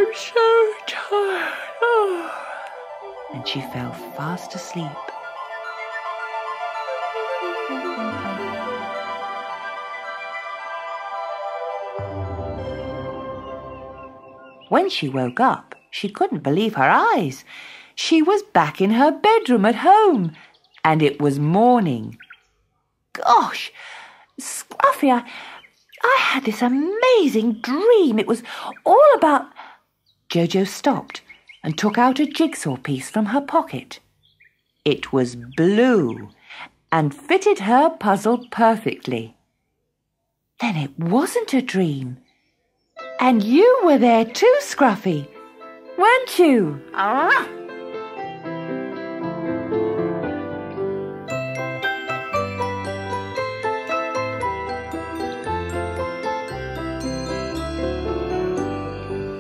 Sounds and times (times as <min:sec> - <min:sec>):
Jingle, tinkle: 0:51.3 - 0:59.4.